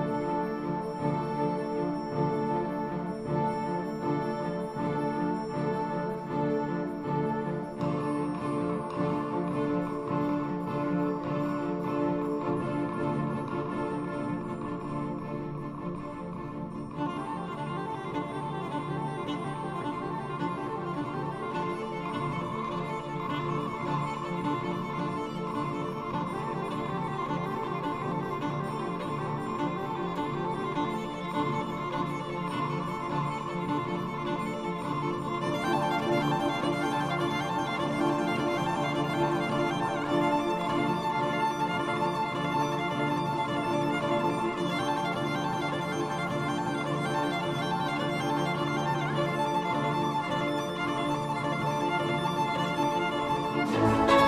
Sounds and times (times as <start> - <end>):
Violin, fiddle: 0.0 - 54.2.